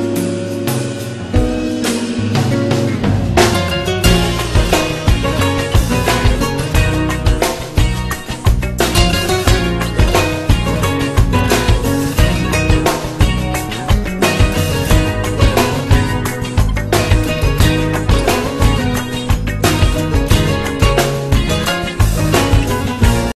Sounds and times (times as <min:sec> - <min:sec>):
Music: 0:00.0 - 0:23.3.